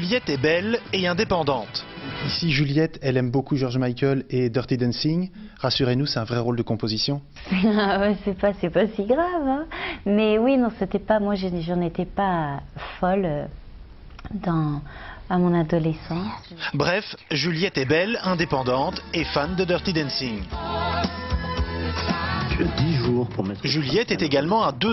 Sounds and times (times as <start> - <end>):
Speech: 15.6 - 20.4, 22.9 - 24.9.